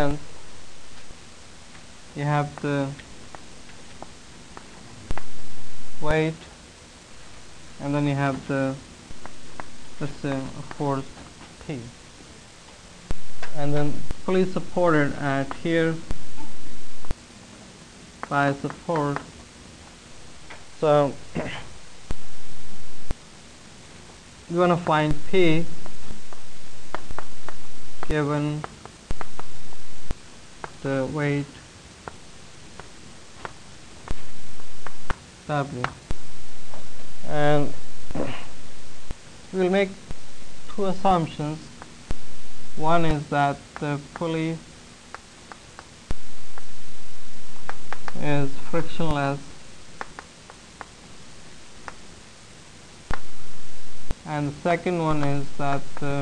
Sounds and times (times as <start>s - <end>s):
Speech: 0.0s - 0.2s, 2.2s - 3.0s, 6.0s - 6.5s, 7.8s - 8.8s, 10.0s - 12.0s, 13.5s - 16.0s, 18.3s - 19.3s, 20.8s - 21.7s, 24.5s - 25.7s, 28.1s - 28.7s, 30.8s - 31.6s, 35.5s - 36.0s, 37.3s - 38.5s, 39.5s - 40.0s, 40.7s - 41.7s, 42.8s - 44.6s, 48.2s - 49.5s, 54.2s - 56.2s.